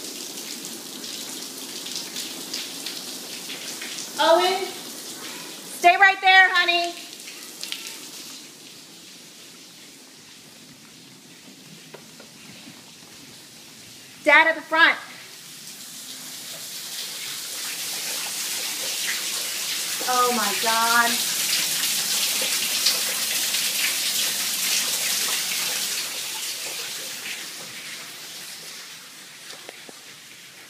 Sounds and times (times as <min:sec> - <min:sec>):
Speech: 0:04.2 - 0:04.8, 0:05.8 - 0:07.1, 0:14.3 - 0:15.2, 0:20.0 - 0:21.2.